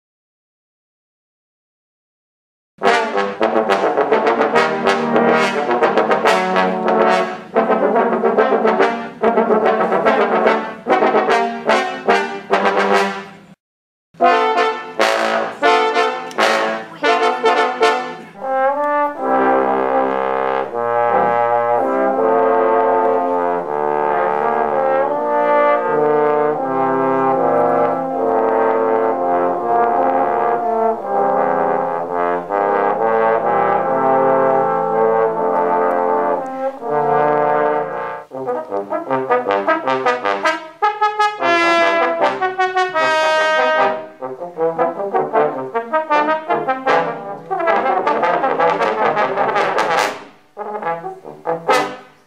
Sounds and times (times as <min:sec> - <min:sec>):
Trombone: 0:02.8 - 0:13.6, 0:14.2 - 0:52.2
Speech: 0:15.6 - 0:18.4.